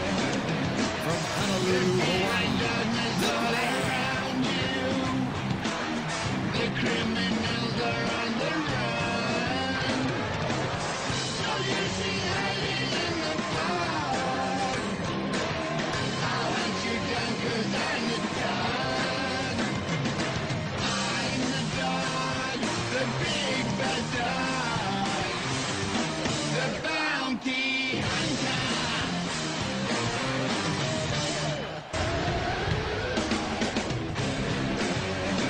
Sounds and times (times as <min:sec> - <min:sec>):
Music: 0:00.0 - 0:35.5.